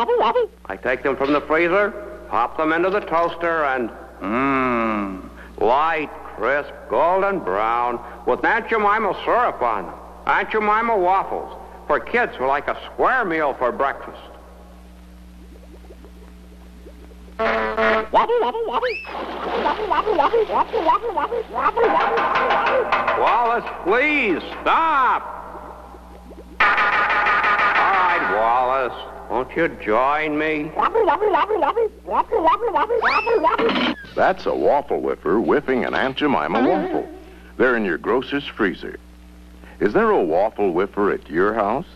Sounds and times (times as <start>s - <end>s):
Speech: 0.7s - 14.4s, 23.2s - 25.3s, 27.8s - 31.2s, 34.1s - 39.0s, 39.8s - 41.9s.